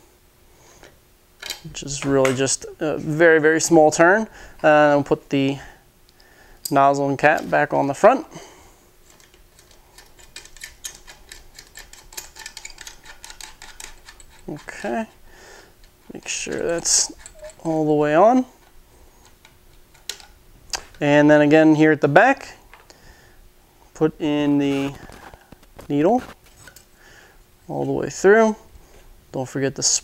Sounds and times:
Speech: 1.7s - 5.7s, 6.7s - 8.4s, 14.5s - 15.2s, 16.1s - 18.5s, 21.0s - 22.6s, 24.0s - 25.0s, 25.9s - 26.4s, 27.7s - 28.7s, 29.3s - 30.0s.

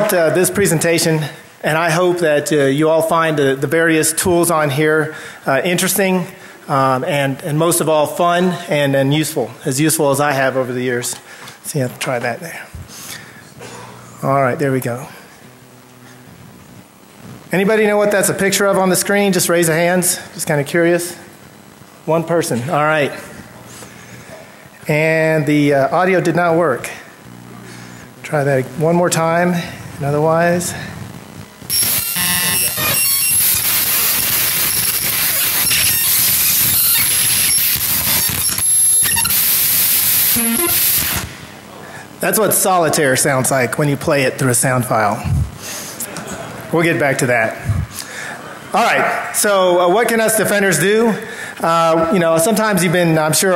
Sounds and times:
Speech: 0.0s - 12.7s, 14.2s - 15.2s, 17.5s - 21.3s, 22.0s - 23.3s, 24.8s - 27.1s, 28.2s - 30.9s, 42.2s - 45.3s, 46.7s - 47.7s, 48.7s - 53.5s.

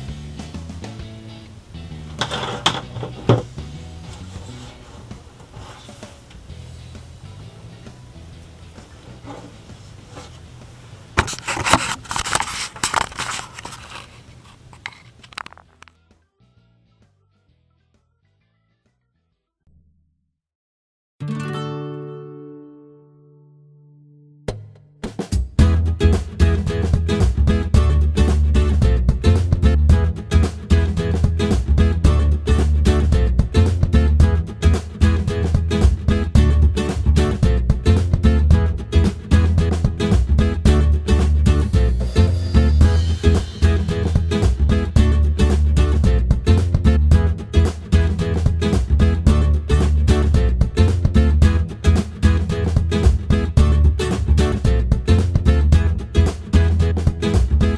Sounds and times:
Music: 0.0s - 13.4s, 14.9s - 20.0s, 21.2s - 57.7s.

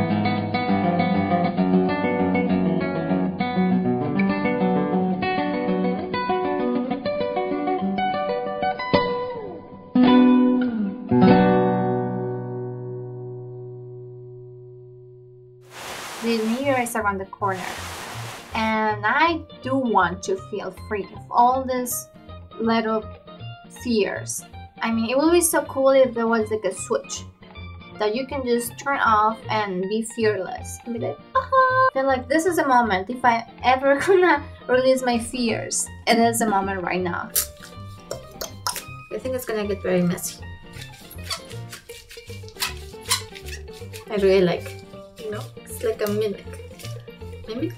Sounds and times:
Music: 0.0s - 47.7s.

